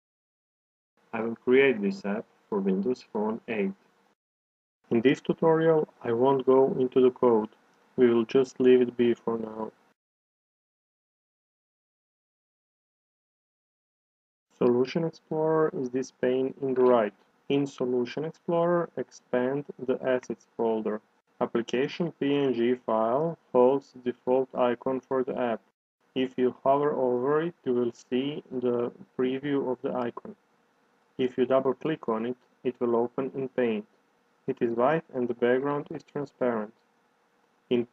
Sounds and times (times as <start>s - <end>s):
Speech: 1.2s - 3.8s, 4.9s - 9.8s, 14.6s - 30.4s, 31.2s - 33.9s, 34.5s - 36.8s, 37.7s - 37.9s.